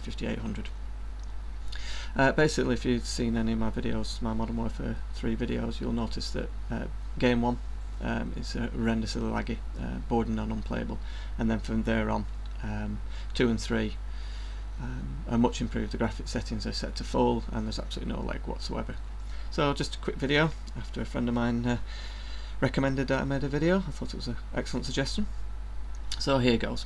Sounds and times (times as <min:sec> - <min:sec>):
Speech: 0:00.0 - 0:00.7, 0:02.2 - 0:14.0, 0:14.8 - 0:21.8, 0:22.6 - 0:25.3, 0:26.1 - 0:26.8.